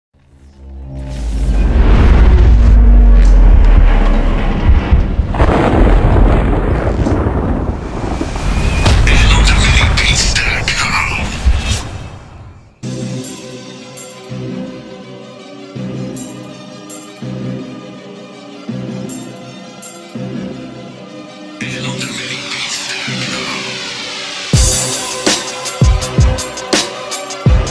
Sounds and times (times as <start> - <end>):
Thunderstorm: 1.6 - 12.6
Speech: 9.0 - 11.4, 21.6 - 23.8.